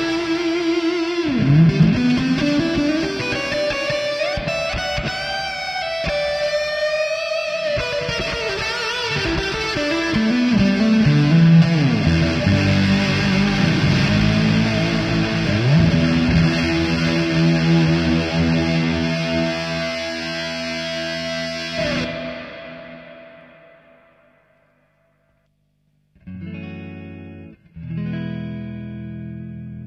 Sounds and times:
Electric guitar: 0.0s - 24.7s, 26.2s - 29.8s
Effects unit: 0.0s - 29.8s.

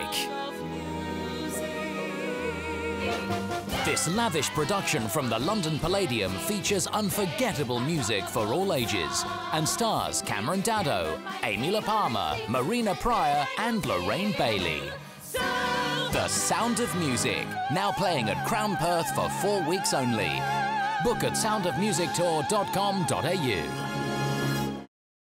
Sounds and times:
Music: 0.0s - 24.9s
Speech: 3.9s - 15.0s, 16.2s - 20.4s, 21.0s - 23.7s.

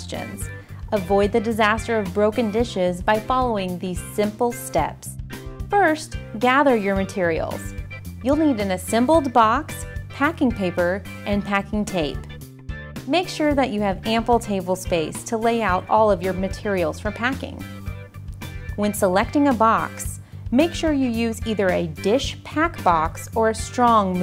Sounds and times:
Speech: 0.0s - 5.2s, 5.8s - 12.3s, 13.1s - 17.7s, 18.8s - 24.2s
Music: 0.0s - 24.2s.

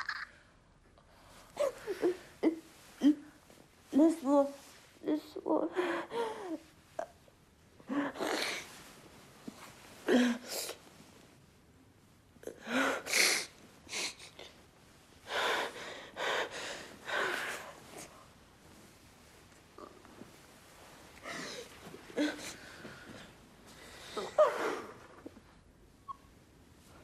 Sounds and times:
Inside, small room: 0.0s - 27.0s
Speech: 3.9s - 5.8s.

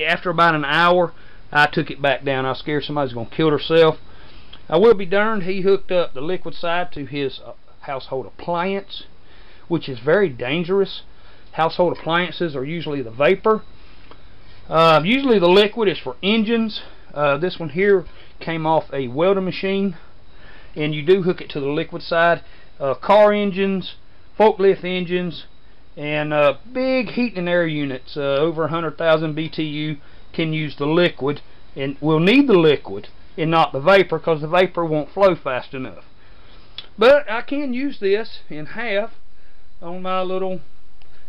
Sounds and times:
Speech: 0.0s - 4.0s, 4.7s - 9.1s, 9.7s - 13.7s, 14.7s - 20.1s, 20.8s - 36.1s, 36.8s - 39.2s, 39.8s - 40.7s.

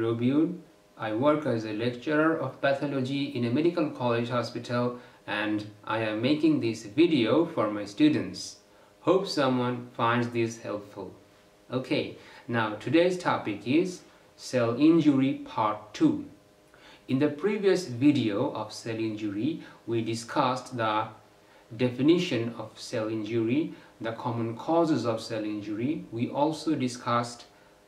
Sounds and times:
Speech: 0.0s - 16.4s, 17.1s - 27.6s.

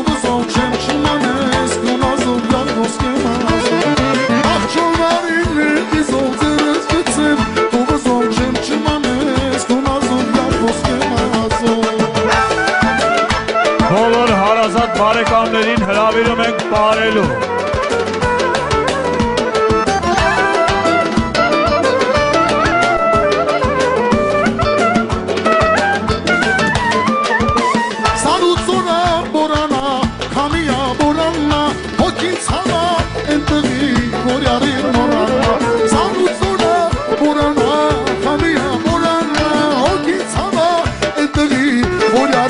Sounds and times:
Music: 0.0s - 42.4s.

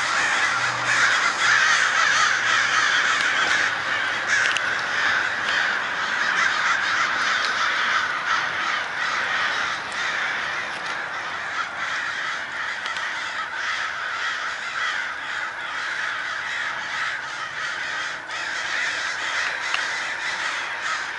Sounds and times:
Caw: 0.0s - 21.1s.

